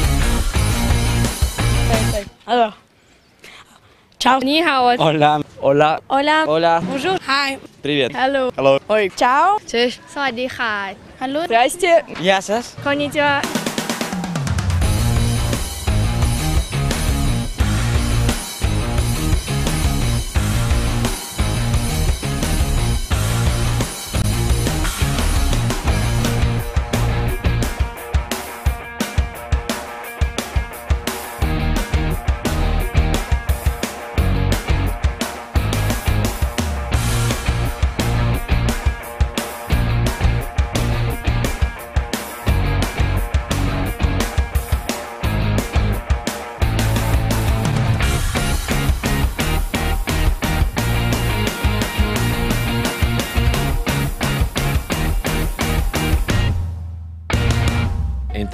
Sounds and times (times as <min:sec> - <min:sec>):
Electronic music: 0:00.0 - 0:02.2, 0:12.8 - 0:29.6, 0:31.1 - 0:56.6, 0:57.4 - 0:58.5.